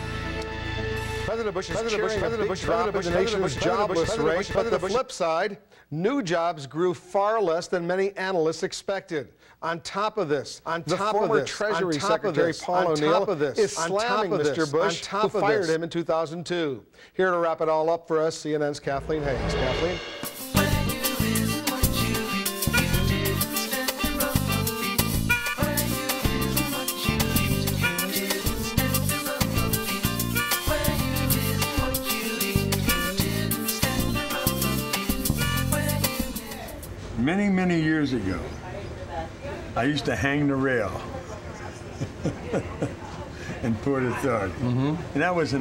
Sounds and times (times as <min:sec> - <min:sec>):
Tender music: 0:00.0 - 0:05.0, 0:19.0 - 0:36.8
Speech: 0:01.3 - 0:20.1.